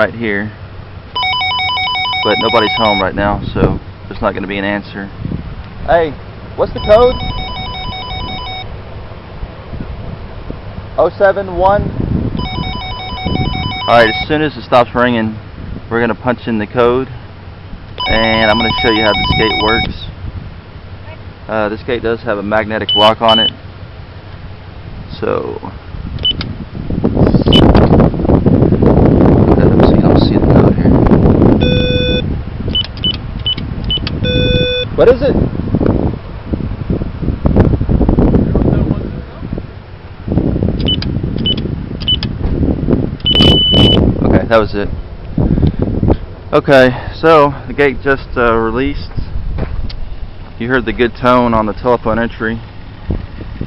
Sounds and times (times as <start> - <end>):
Speech: 0.0 - 0.6, 2.3 - 5.1, 5.9 - 7.2, 11.0 - 11.9, 13.9 - 17.1, 18.0 - 20.1, 21.1 - 23.5, 25.1 - 25.8, 29.6 - 31.0, 35.0 - 35.4, 44.2 - 44.9, 46.5 - 49.3, 50.6 - 52.6
Ringtone: 1.2 - 3.0, 6.8 - 8.7, 12.4 - 14.3, 18.0 - 19.9, 31.6 - 32.2, 34.3 - 34.9, 43.3 - 44.0
Telephone bell ringing: 1.2 - 3.1, 6.8 - 8.7, 12.4 - 14.3, 18.0 - 19.9, 31.6 - 32.2, 34.2 - 34.9.